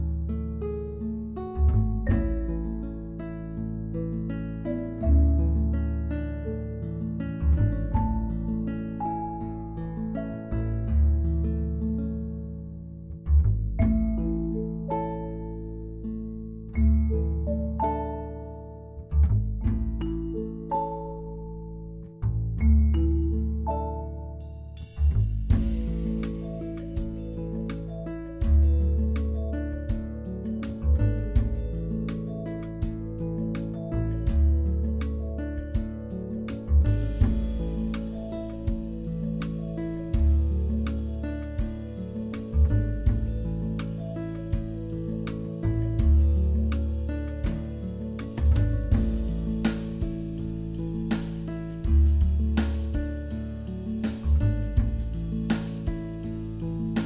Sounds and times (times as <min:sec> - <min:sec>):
Music: 0:00.0 - 0:57.0.